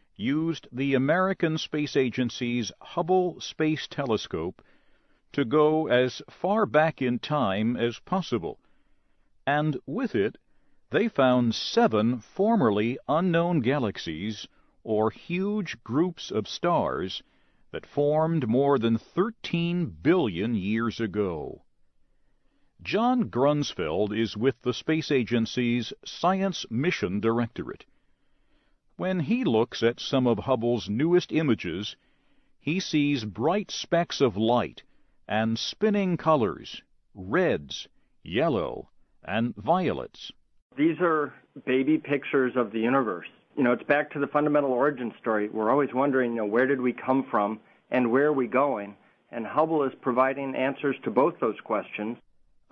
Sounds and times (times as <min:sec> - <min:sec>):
Speech: 0:00.2 - 0:04.6, 0:05.3 - 0:08.6, 0:09.4 - 0:21.7, 0:22.8 - 0:27.9, 0:29.0 - 0:32.0, 0:32.6 - 0:52.3.